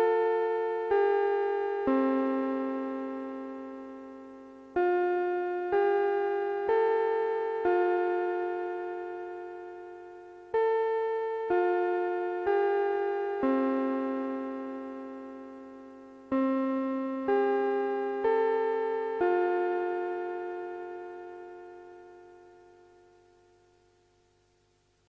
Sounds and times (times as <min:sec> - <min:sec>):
Music: 0:00.0 - 0:25.1.